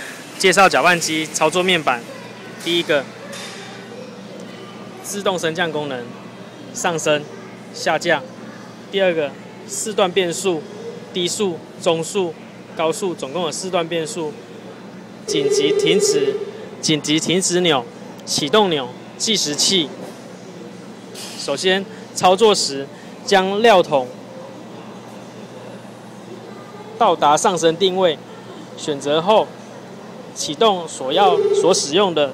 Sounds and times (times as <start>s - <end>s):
Speech: 0.4s - 3.1s, 15.3s - 20.0s, 30.3s - 32.3s.